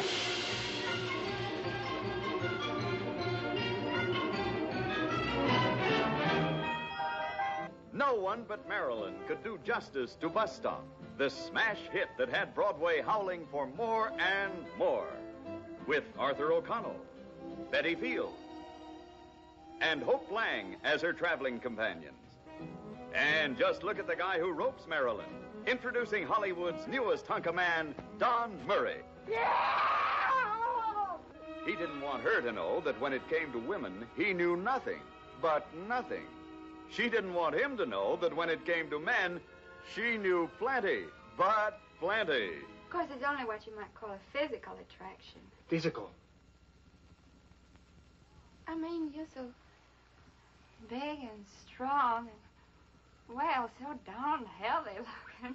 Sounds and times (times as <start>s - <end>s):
Music: 0.0s - 49.3s, 52.9s - 55.5s.